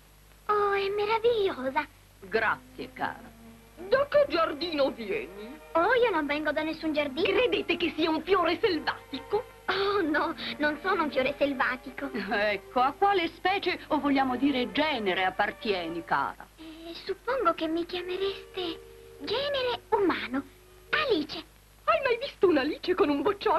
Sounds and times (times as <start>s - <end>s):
Music: 0.5s - 23.5s
Speech: 0.5s - 23.5s.